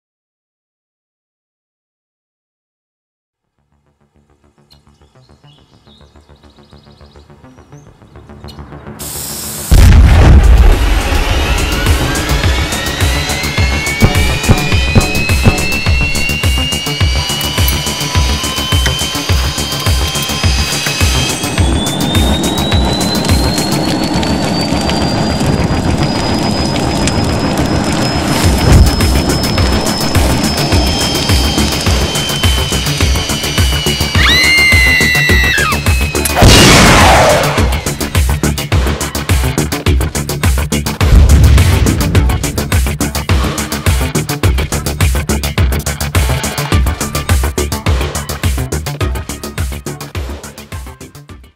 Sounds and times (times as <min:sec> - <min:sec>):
Music: 0:03.4 - 0:51.5.